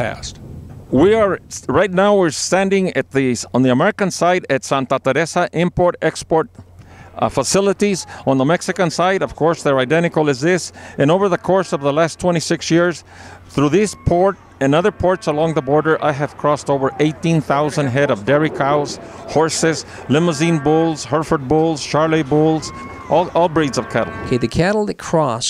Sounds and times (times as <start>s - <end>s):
Speech: 0.0s - 6.6s, 7.2s - 25.4s.